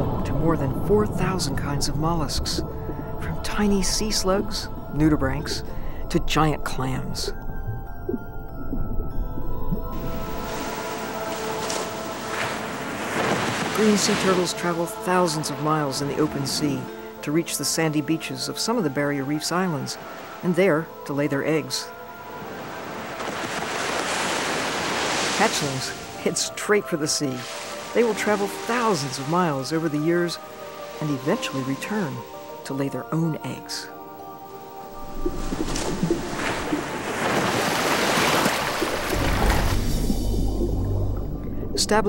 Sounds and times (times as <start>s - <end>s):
Ocean: 0.0s - 42.0s.